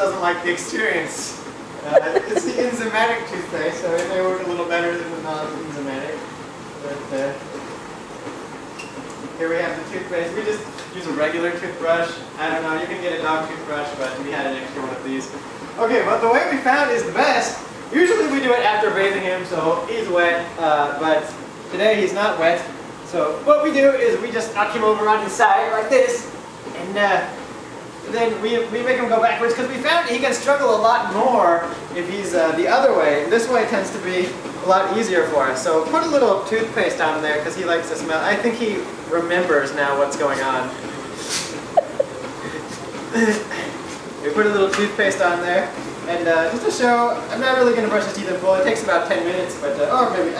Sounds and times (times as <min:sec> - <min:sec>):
Speech: 0:00.0 - 0:07.6, 0:09.4 - 0:27.4, 0:28.0 - 0:40.9, 0:43.1 - 0:50.3.